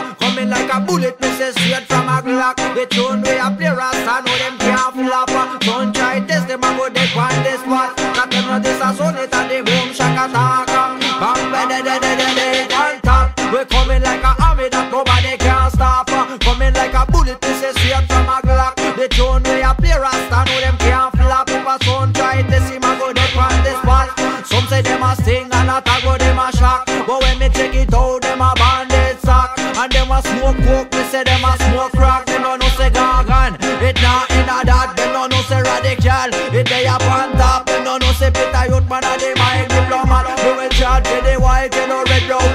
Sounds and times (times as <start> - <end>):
Music: 0.0 - 42.5.